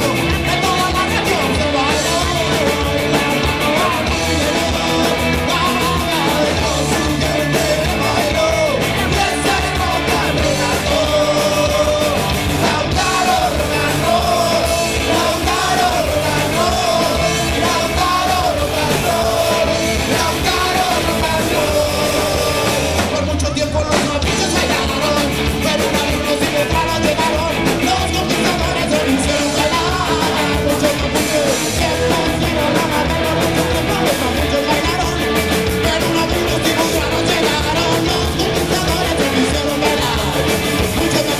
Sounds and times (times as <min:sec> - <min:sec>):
Rock and roll: 0:00.0 - 0:41.3.